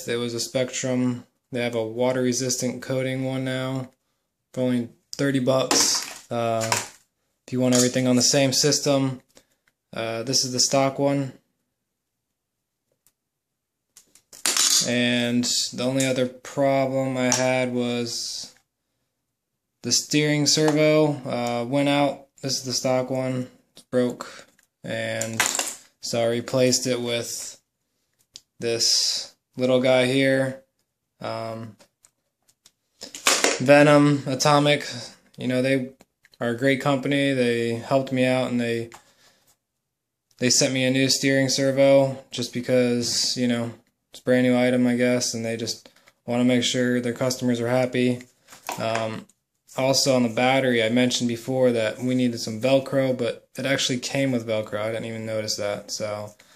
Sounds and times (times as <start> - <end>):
Speech: 0.0 - 3.9, 4.6 - 6.9, 7.5 - 9.3, 9.9 - 11.4, 14.6 - 18.6, 19.8 - 27.6, 28.6 - 31.8, 33.5 - 39.0, 40.4 - 56.4.